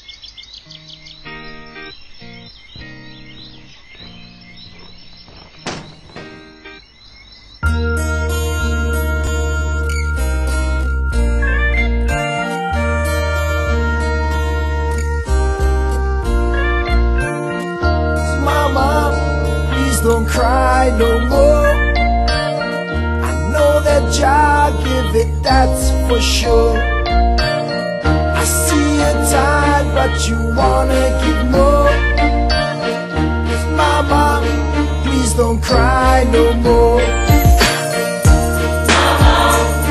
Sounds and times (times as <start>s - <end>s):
Background music: 7.6s - 39.9s.